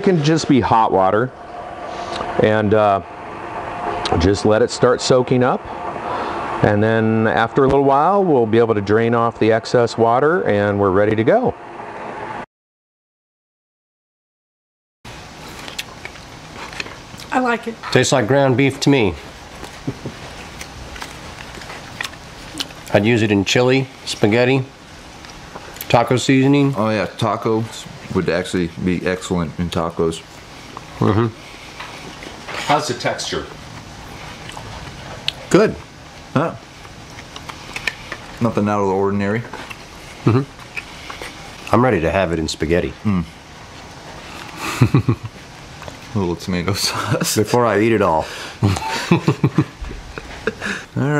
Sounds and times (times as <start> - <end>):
Speech: 0.0 - 1.3, 2.4 - 3.0, 4.1 - 5.6, 6.6 - 11.6, 17.3 - 19.2, 22.9 - 24.7, 25.8 - 30.2, 32.7 - 33.6, 35.5 - 35.8, 36.4 - 36.6, 38.4 - 39.6, 41.7 - 43.3, 46.1 - 48.3, 51.0 - 51.1.